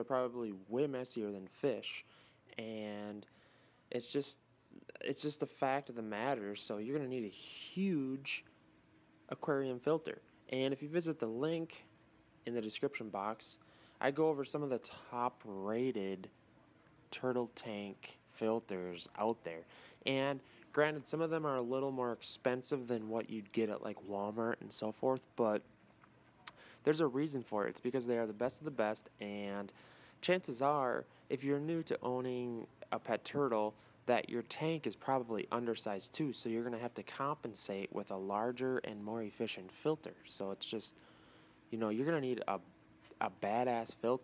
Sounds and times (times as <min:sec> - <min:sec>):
Speech: 0:00.0 - 0:03.3, 0:03.9 - 0:08.5, 0:09.3 - 0:16.4, 0:17.1 - 0:25.7, 0:26.8 - 0:41.0, 0:41.7 - 0:44.2.